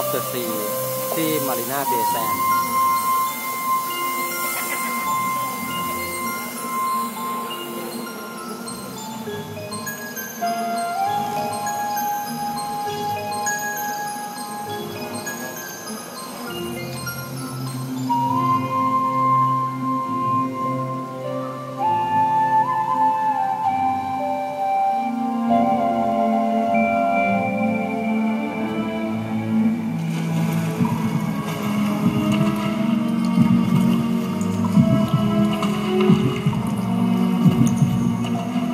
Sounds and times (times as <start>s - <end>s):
Music: 0.0s - 38.7s.